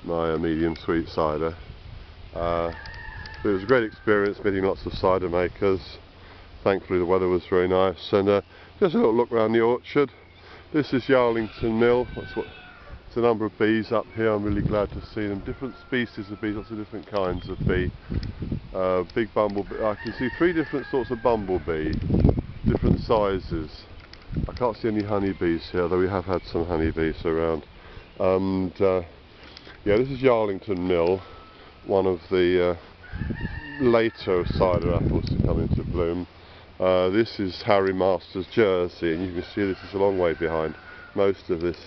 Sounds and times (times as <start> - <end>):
Speech: 0.0 - 1.6, 2.4 - 2.8, 3.4 - 6.0, 6.6 - 18.0, 18.8 - 22.0, 22.7 - 27.6, 28.2 - 29.1, 29.8 - 31.3, 31.9 - 32.8, 33.7 - 41.8.